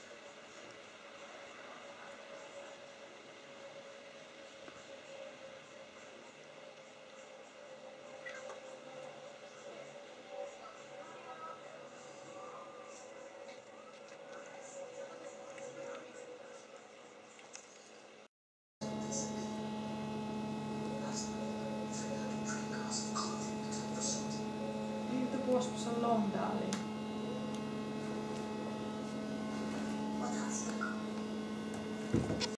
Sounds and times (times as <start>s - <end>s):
Speech: 18.9s - 19.7s, 20.7s - 27.5s, 30.2s - 31.2s.